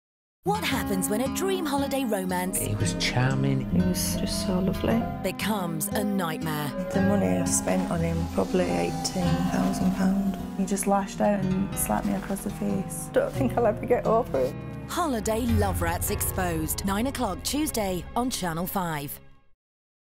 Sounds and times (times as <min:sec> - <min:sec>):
Music: 0:00.4 - 0:19.6.